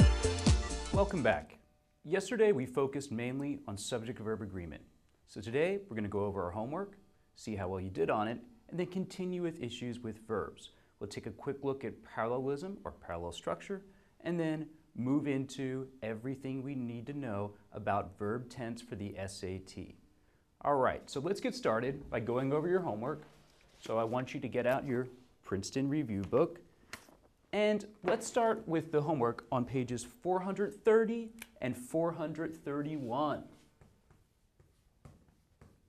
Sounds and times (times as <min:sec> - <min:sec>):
Speech: 0:01.0 - 0:20.0, 0:20.6 - 0:26.6, 0:27.5 - 0:33.6.